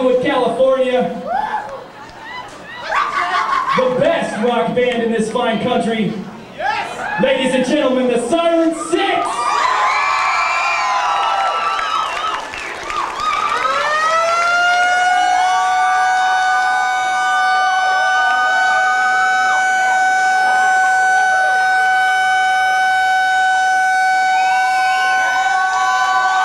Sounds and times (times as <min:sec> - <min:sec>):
Siren: 0:13.3 - 0:26.4.